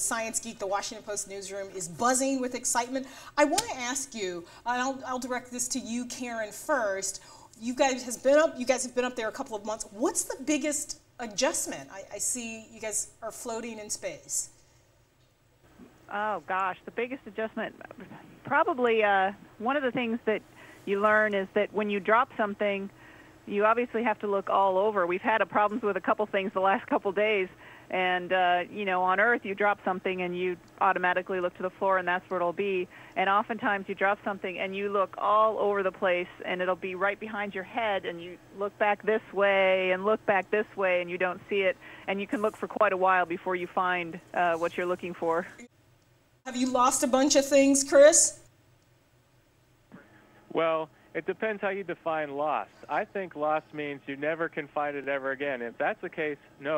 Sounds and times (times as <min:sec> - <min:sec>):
Speech: 0:00.0 - 0:14.5, 0:16.1 - 0:22.9, 0:23.5 - 0:45.7, 0:46.5 - 0:48.4, 0:50.5 - 0:56.7.